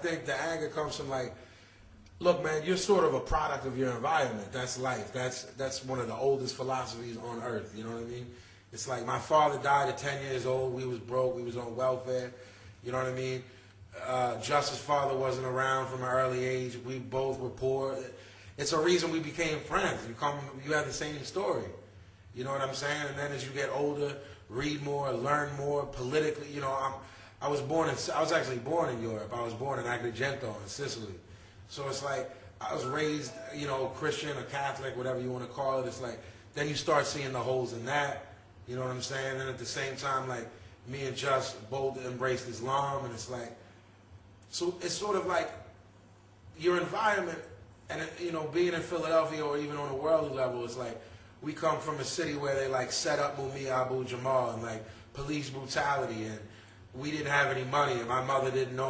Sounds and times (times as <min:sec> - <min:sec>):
Speech: 0:00.0 - 0:01.4, 0:02.1 - 0:43.6, 0:44.5 - 0:45.7, 0:46.6 - 0:58.9.